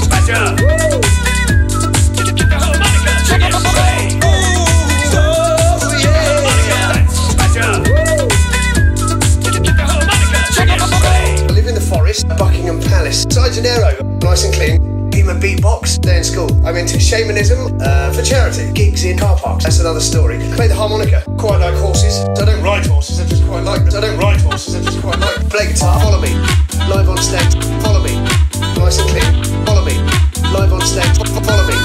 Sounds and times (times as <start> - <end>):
Music: 0.0 - 31.8.